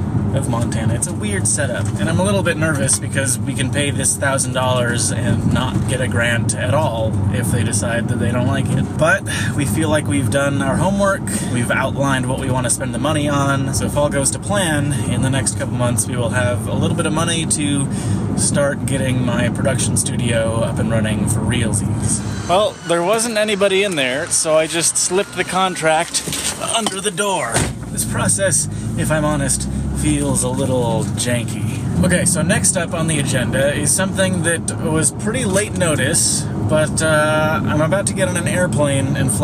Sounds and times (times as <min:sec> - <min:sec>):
Outside, urban or manmade: 0:00.0 - 0:39.4
Speech: 0:00.3 - 0:39.4.